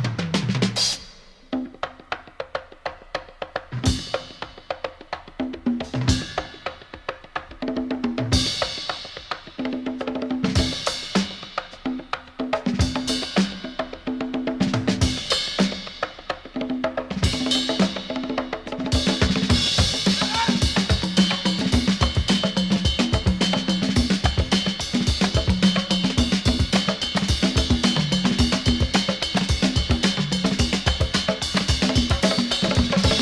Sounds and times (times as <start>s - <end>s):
Bass drum: 18.6s - 33.2s.